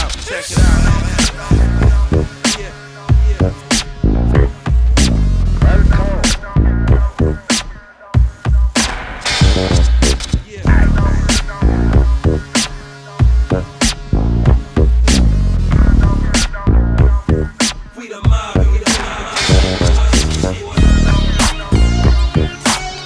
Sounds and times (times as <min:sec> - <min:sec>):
Electronica: 0:00.0 - 0:23.0
Hip hop music: 0:00.0 - 0:23.0.